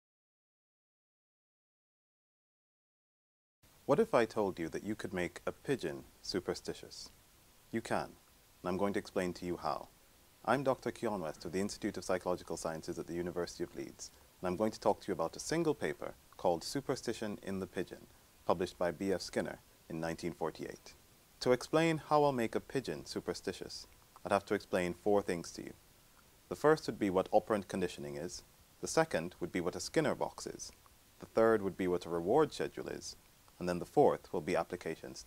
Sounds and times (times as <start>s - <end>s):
Speech: 3.9s - 7.1s, 7.7s - 25.8s, 26.5s - 35.2s.